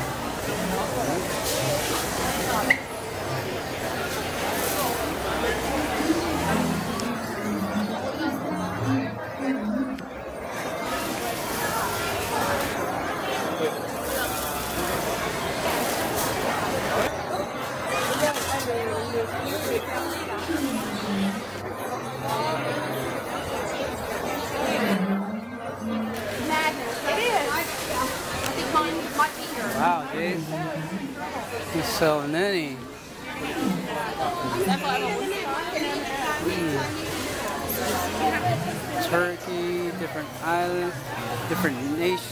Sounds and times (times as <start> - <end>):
Inside, large room or hall: 0.0 - 42.3.